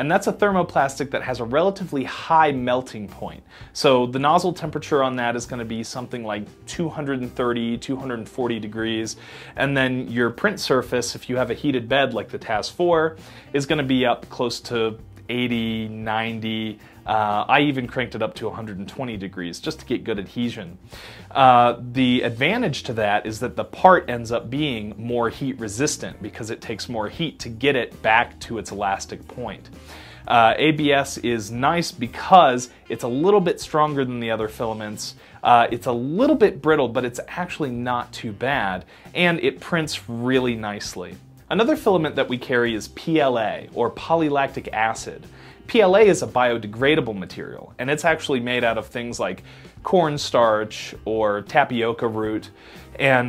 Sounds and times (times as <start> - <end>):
Speech: 0.0 - 53.2.